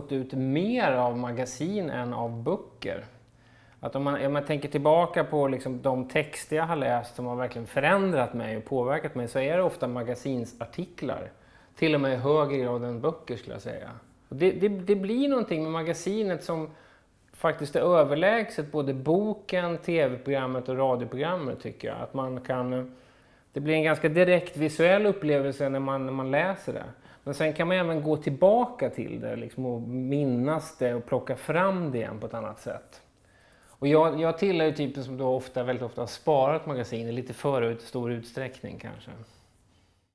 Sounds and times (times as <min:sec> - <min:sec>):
Speech: 0:00.0 - 0:03.2, 0:03.8 - 0:33.1, 0:33.8 - 0:39.4.